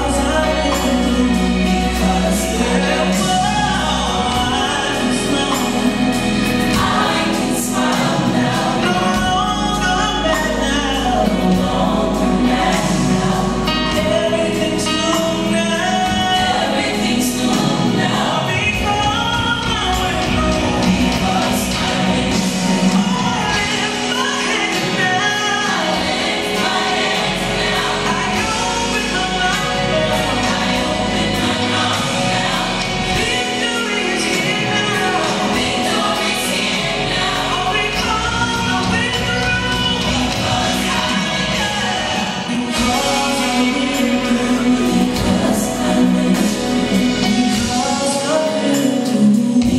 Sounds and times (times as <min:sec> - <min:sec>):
Choir: 0:00.0 - 0:49.7.